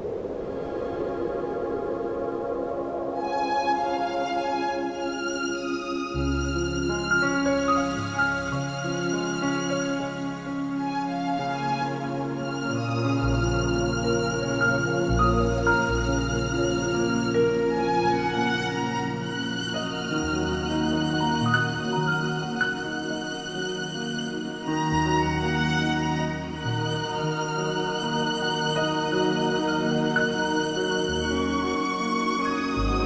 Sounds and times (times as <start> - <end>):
Violin, fiddle: 3.2 - 33.0.